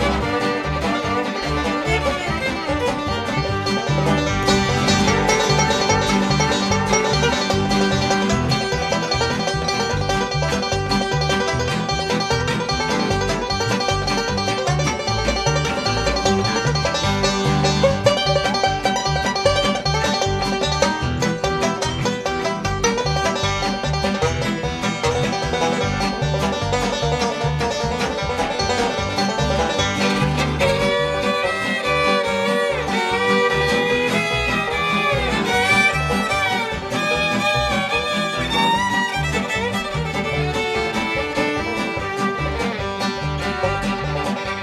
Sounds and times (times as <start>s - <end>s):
Banjo: 0.0s - 44.6s.